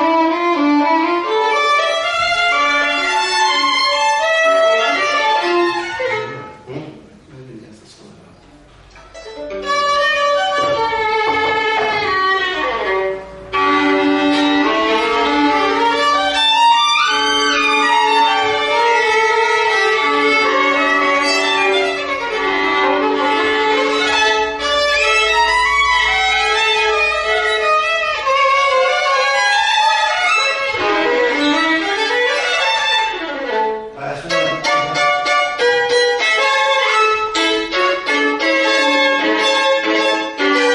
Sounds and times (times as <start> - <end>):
Violin, fiddle: 0.0 - 6.7, 9.1 - 40.7.